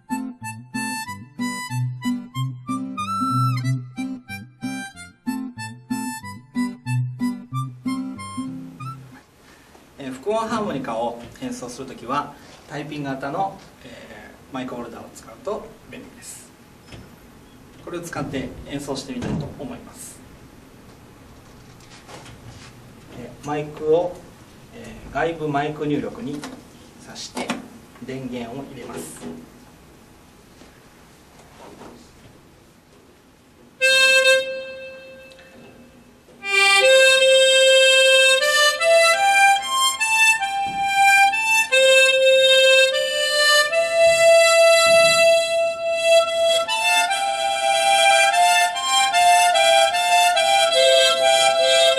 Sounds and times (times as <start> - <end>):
Speech: 10.0 - 16.6, 17.8 - 20.3, 23.1 - 29.4.